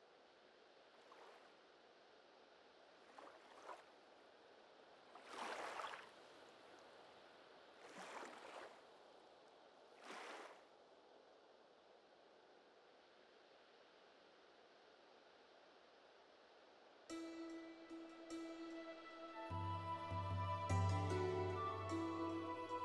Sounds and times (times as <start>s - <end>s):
Boat, Water vehicle: 0.9s - 1.6s, 2.7s - 11.3s.